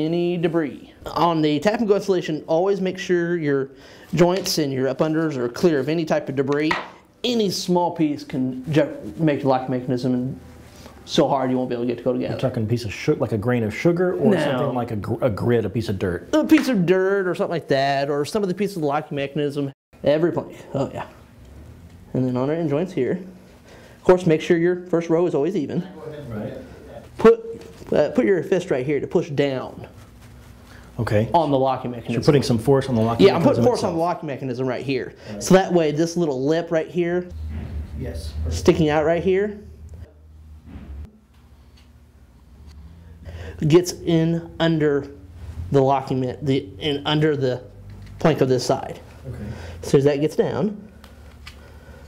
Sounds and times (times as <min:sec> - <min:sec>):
Speech: 0:00.0 - 0:10.4, 0:11.1 - 0:21.2, 0:24.1 - 0:29.9, 0:31.0 - 0:37.3, 0:43.6 - 0:50.8.